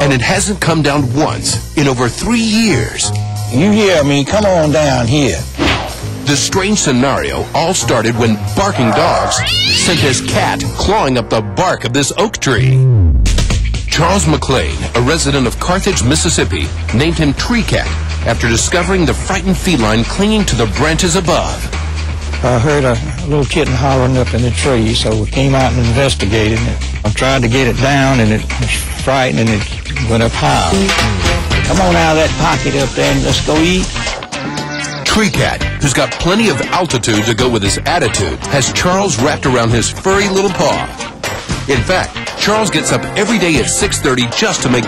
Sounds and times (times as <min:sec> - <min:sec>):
Speech: 0:00.0 - 0:05.5, 0:06.2 - 0:12.8, 0:13.9 - 0:21.7, 0:22.4 - 0:31.0, 0:31.6 - 0:34.0, 0:35.0 - 0:41.0, 0:41.7 - 0:44.8
Music: 0:00.0 - 0:44.8.